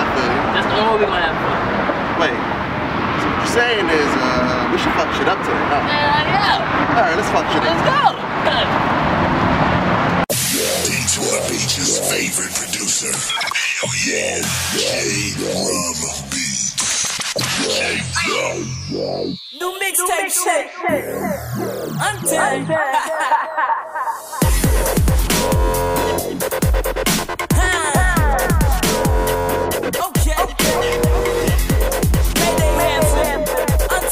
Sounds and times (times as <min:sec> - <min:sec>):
Dubstep: 0:10.3 - 0:34.1.